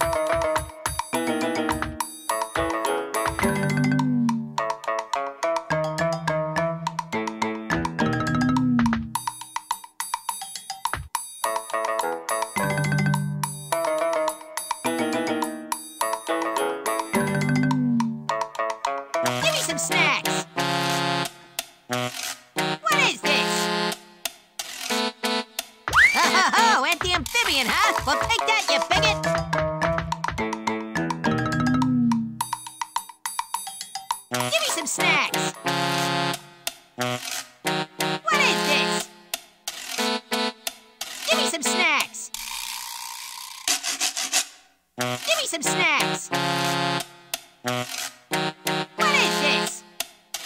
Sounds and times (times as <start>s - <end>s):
Music: 0.0s - 42.5s, 43.2s - 50.4s
Speech: 19.4s - 20.5s, 22.8s - 23.7s, 26.1s - 29.3s, 34.4s - 35.6s, 38.3s - 39.1s, 41.3s - 42.4s, 45.2s - 46.4s, 49.0s - 49.8s.